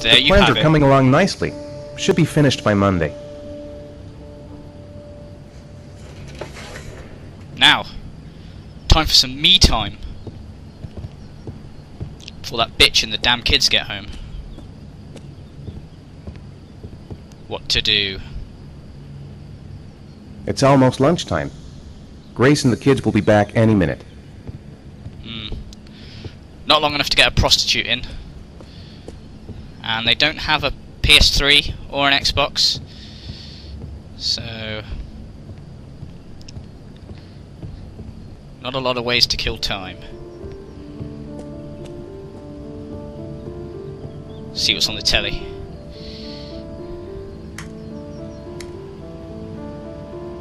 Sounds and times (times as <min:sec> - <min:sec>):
Speech: 0:00.0 - 0:03.1, 0:20.5 - 0:21.5, 0:22.4 - 0:24.0, 0:26.7 - 0:28.1, 0:29.8 - 0:32.8, 0:38.6 - 0:40.1, 0:44.6 - 0:45.5.